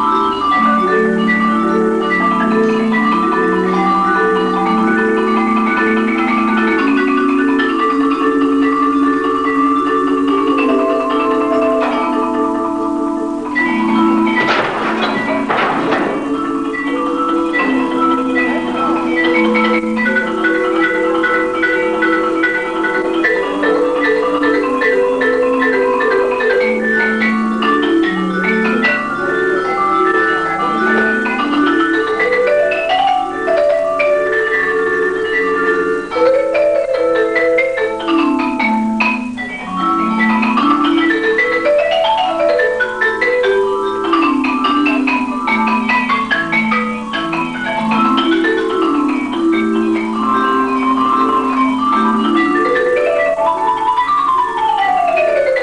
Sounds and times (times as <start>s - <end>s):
Marimba, xylophone: 0.0s - 55.6s.